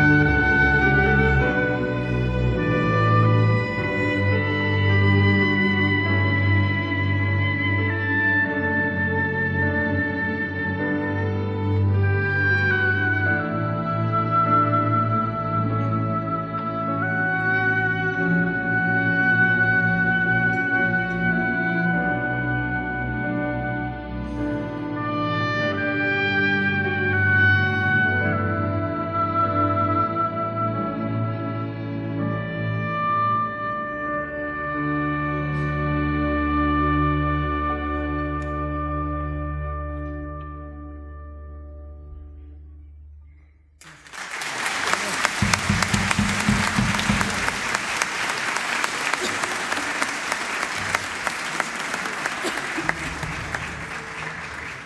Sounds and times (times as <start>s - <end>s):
Classical music: 0.0s - 54.8s
Inside, large room or hall: 0.0s - 54.8s
Orchestra: 0.0s - 54.8s.